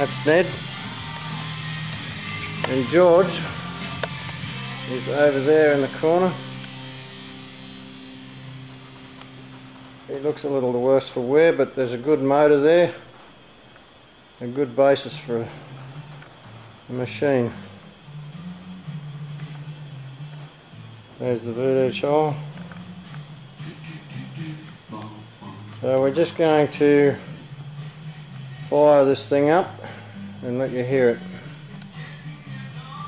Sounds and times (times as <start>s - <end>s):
Speech: 10.1s - 13.0s, 14.4s - 15.6s, 16.9s - 17.6s, 21.2s - 22.4s, 25.8s - 27.2s, 28.7s - 29.8s, 30.4s - 31.2s.